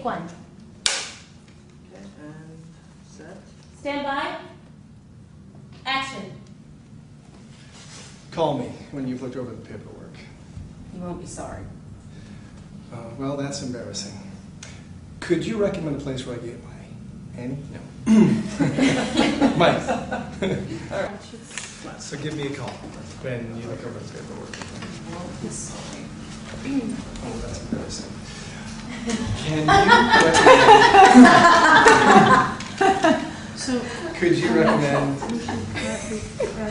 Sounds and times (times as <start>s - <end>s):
Conversation: 0.0s - 36.7s.